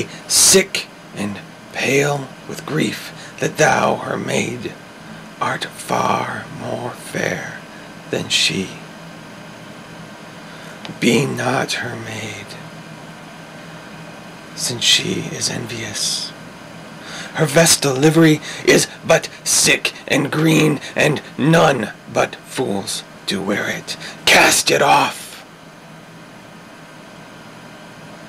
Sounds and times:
Speech: 0.0s - 4.8s, 5.4s - 8.8s, 10.9s - 12.6s, 14.6s - 16.4s, 17.3s - 25.5s.

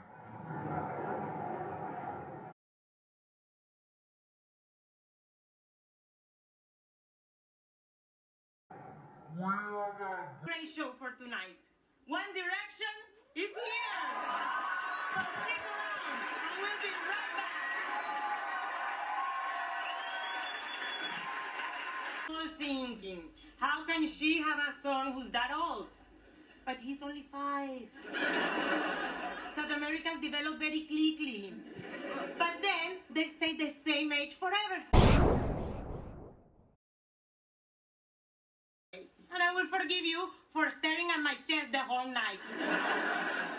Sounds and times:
Speech: 9.4s - 14.2s, 15.1s - 17.6s, 22.3s - 26.0s, 26.7s - 27.9s, 29.5s - 31.7s, 32.3s - 34.9s, 39.0s - 42.4s.

